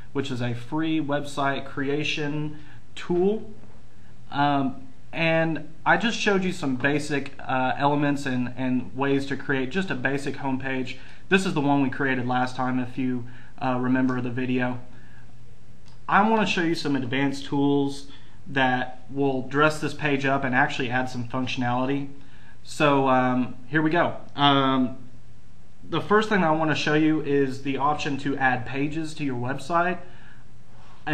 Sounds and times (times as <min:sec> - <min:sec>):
Speech: 0:00.0 - 0:03.6, 0:04.3 - 0:14.9, 0:16.0 - 0:25.0, 0:25.8 - 0:30.1.